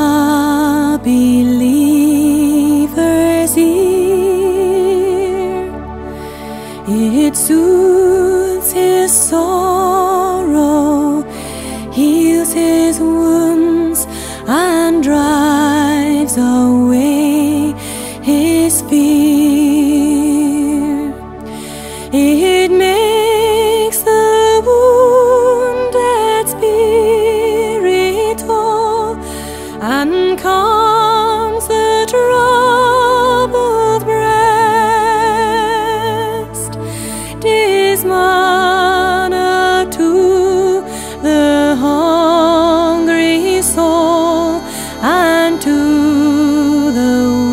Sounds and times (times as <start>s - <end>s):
Music: 0.0s - 47.5s.